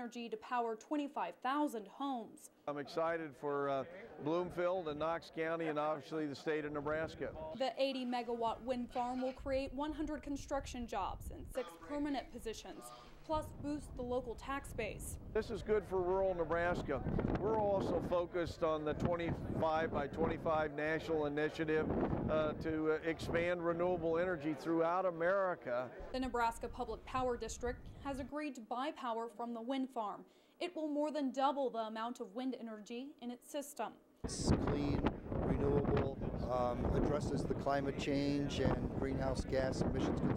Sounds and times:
Wind: 0.0s - 30.1s, 34.0s - 40.3s
Speech: 0.0s - 40.3s.

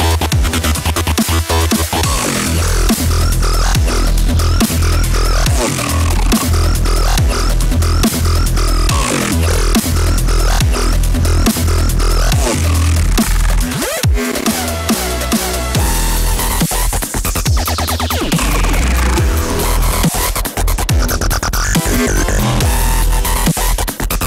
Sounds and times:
Dubstep: 0.0s - 24.2s.

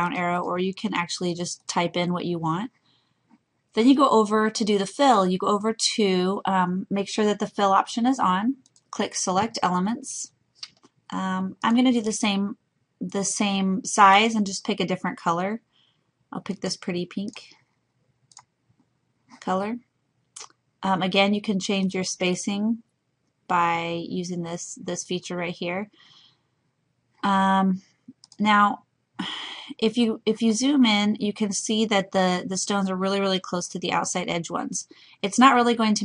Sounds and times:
Speech: 0.0s - 2.7s, 3.8s - 10.3s, 11.1s - 15.6s, 16.4s - 17.5s, 19.4s - 19.8s, 20.8s - 22.8s, 23.5s - 25.9s, 27.3s - 27.8s, 28.4s - 36.0s
Clicking: 8.6s - 8.9s, 18.3s - 18.5s, 28.1s - 28.4s.

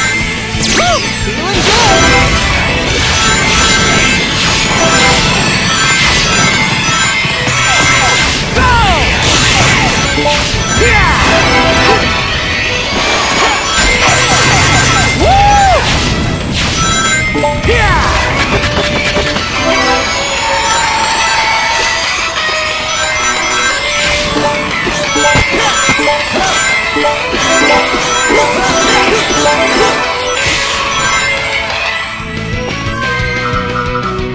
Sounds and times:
Music: 0.0s - 34.3s.

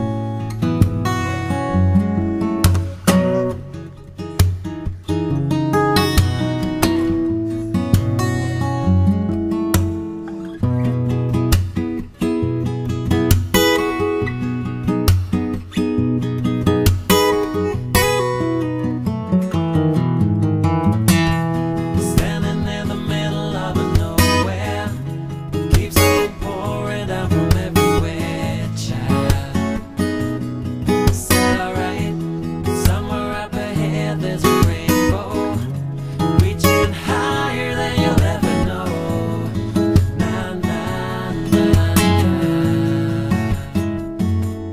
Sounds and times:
Music: 0.0s - 44.7s.

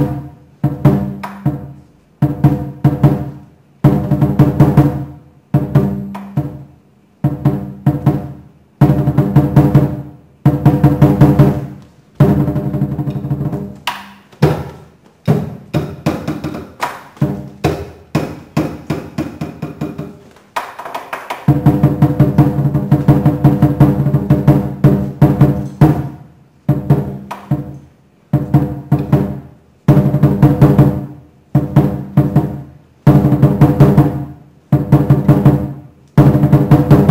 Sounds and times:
Inside, large room or hall: 0.0s - 37.1s
Music: 0.0s - 37.1s.

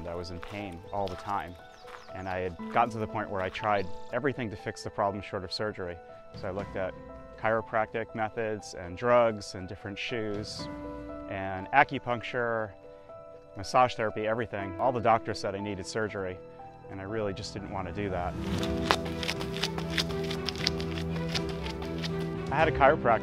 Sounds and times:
Speech: 0.0s - 1.6s, 2.2s - 10.7s, 11.3s - 12.7s, 13.6s - 18.4s, 22.5s - 23.2s
Music: 0.0s - 23.2s.

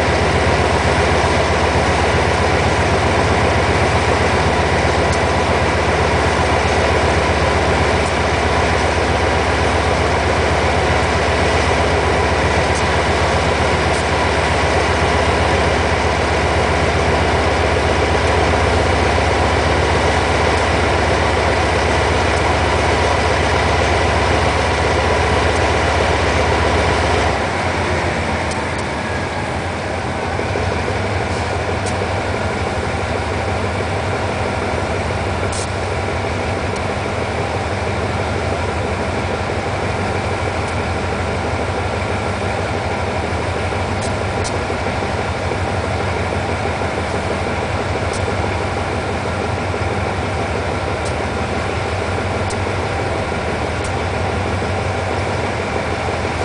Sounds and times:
Vehicle: 0.0s - 56.4s.

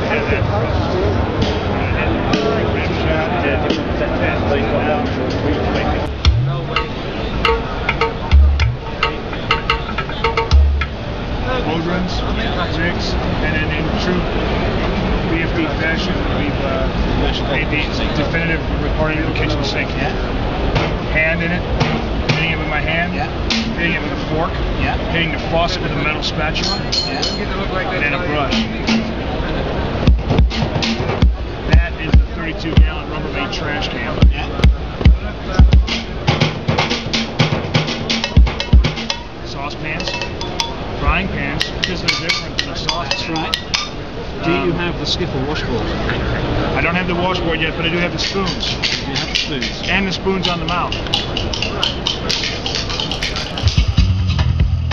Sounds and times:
Speech: 0.0s - 9.4s, 11.3s - 20.4s, 21.0s - 30.0s, 31.4s - 36.1s, 38.5s - 40.3s, 41.0s - 53.6s
Percussion: 0.0s - 12.0s, 19.2s - 44.7s, 47.3s - 54.9s.

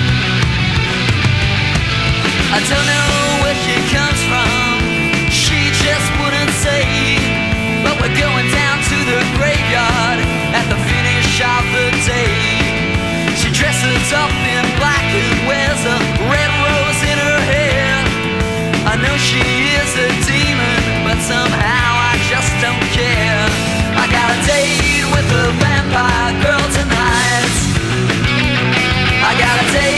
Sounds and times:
Punk rock: 0.0s - 29.9s.

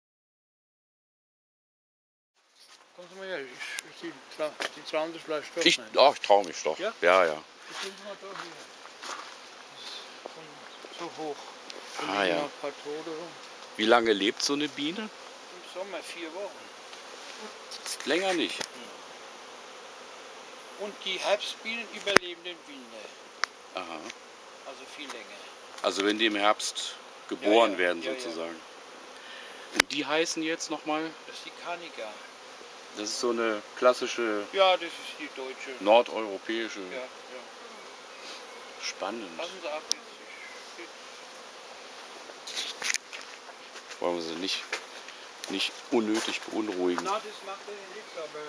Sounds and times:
Bee, wasp, etc.: 2.4s - 48.4s
Fly, housefly: 2.4s - 48.4s.

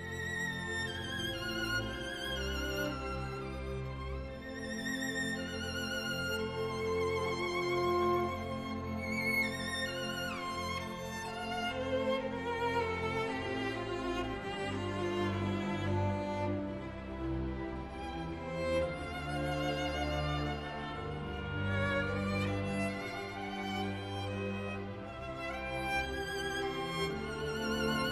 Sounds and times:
Cello: 0.0s - 28.1s
Violin, fiddle: 0.0s - 28.1s.

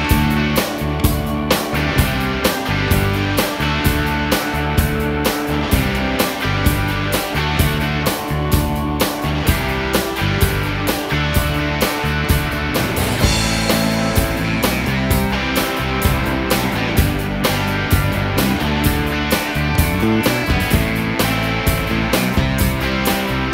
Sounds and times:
Bass guitar: 0.0s - 23.5s.

